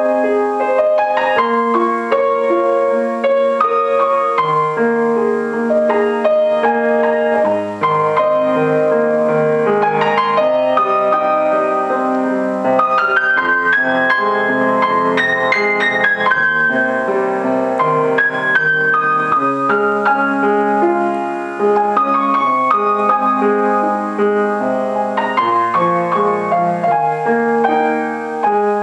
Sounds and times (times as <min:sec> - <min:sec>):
Music: 0:00.0 - 0:28.8.